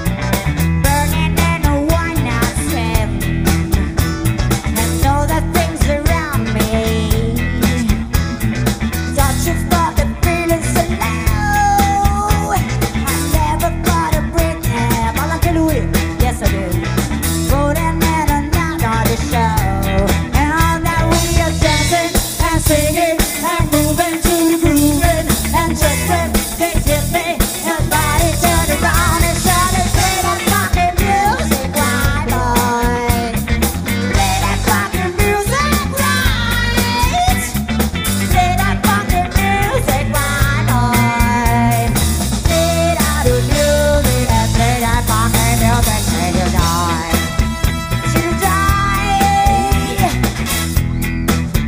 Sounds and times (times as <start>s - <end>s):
Rock music: 0.0s - 51.6s.